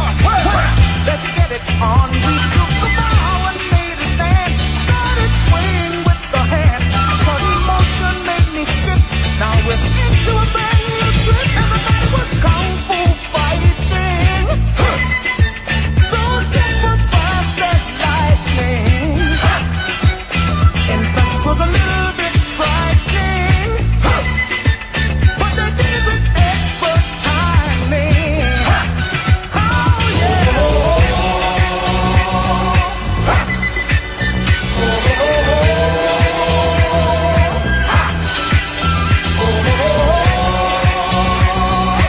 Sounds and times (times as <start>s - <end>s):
Disco: 0.0s - 42.0s.